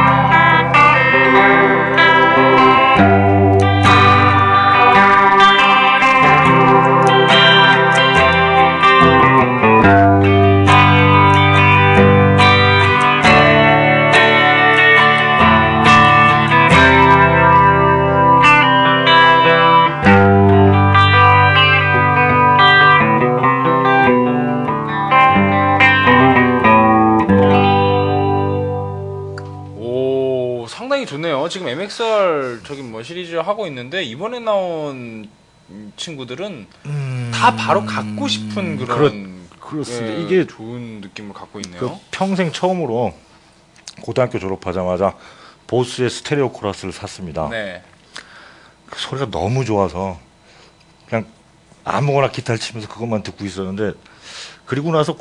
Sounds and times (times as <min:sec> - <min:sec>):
Steel guitar, slide guitar: 0:00.0 - 0:29.8.